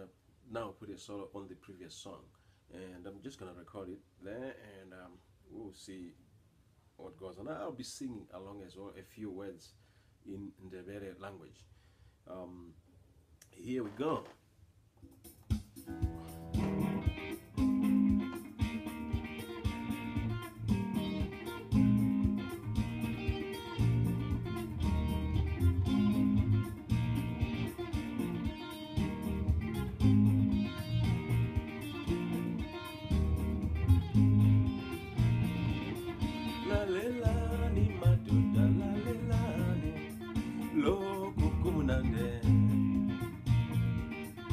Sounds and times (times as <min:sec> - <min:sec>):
Jazz: 0:15.1 - 0:44.5
Acoustic guitar: 0:15.2 - 0:44.5
Strum: 0:15.5 - 0:44.5.